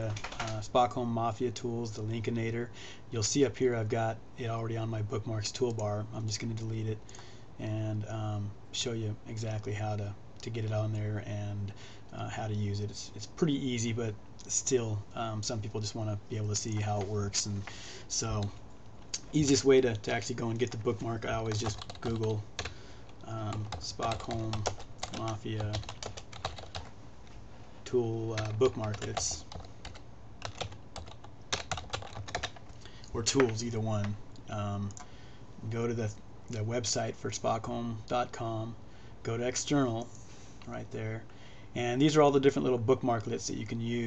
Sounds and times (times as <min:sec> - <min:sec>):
Speech: 0:00.0 - 0:07.0, 0:07.6 - 0:18.6, 0:19.2 - 0:22.4, 0:23.2 - 0:25.9, 0:27.8 - 0:29.5, 0:33.1 - 0:35.0, 0:35.6 - 0:40.1, 0:40.7 - 0:44.0.